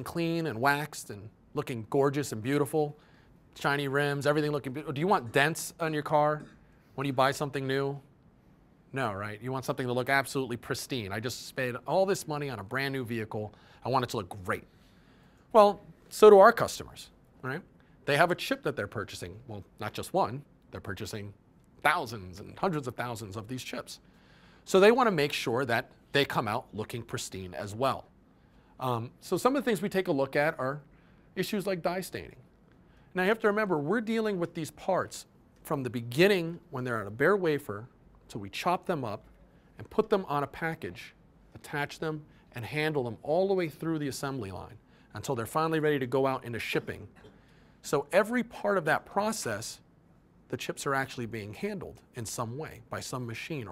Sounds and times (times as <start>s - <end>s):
Speech: 0.0s - 3.0s, 3.6s - 8.1s, 8.9s - 14.7s, 15.5s - 24.0s, 24.6s - 28.1s, 28.8s - 32.4s, 33.1s - 49.9s, 50.5s - 53.7s.